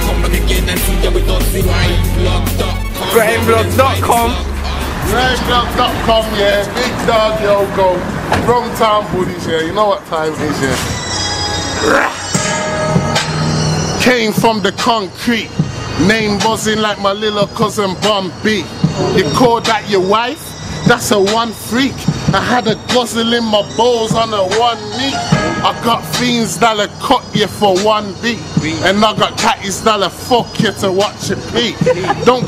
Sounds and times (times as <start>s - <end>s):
Music: 0.0s - 8.2s, 9.4s - 32.4s.